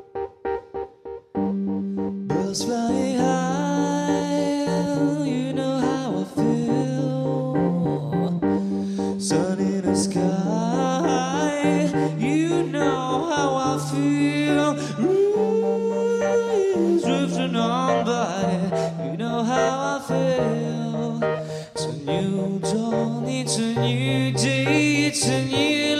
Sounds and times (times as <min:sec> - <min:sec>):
Music: 0:00.0 - 0:25.9.